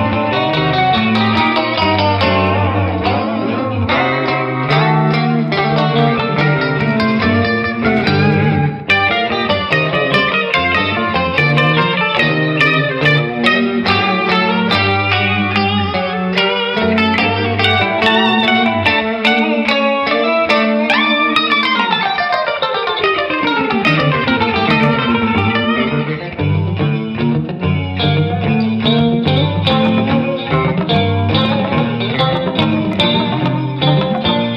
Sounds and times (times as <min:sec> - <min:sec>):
Electric guitar: 0:00.0 - 0:34.5
Strum: 0:00.0 - 0:34.5.